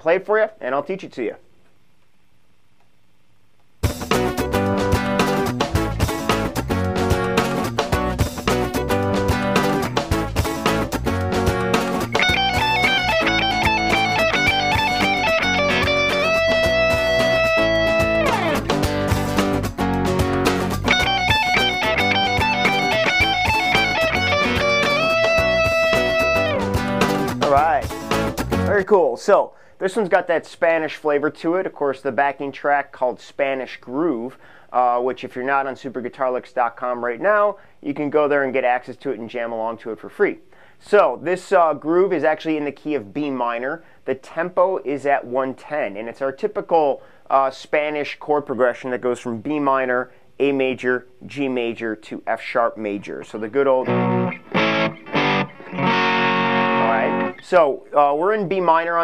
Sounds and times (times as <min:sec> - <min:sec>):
Electric guitar: 0:03.8 - 0:28.7, 0:53.8 - 0:57.6
Strum: 0:03.8 - 0:28.7, 0:53.8 - 0:57.5
Acoustic guitar: 0:03.8 - 0:28.8, 0:53.7 - 0:57.6.